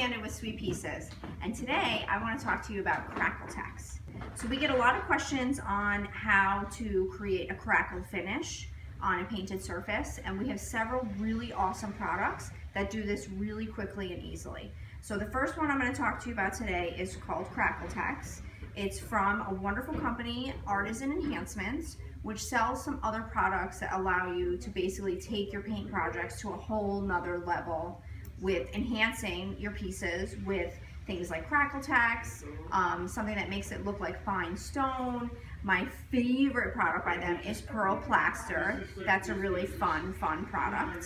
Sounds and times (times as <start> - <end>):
Speech: 0.0 - 41.0.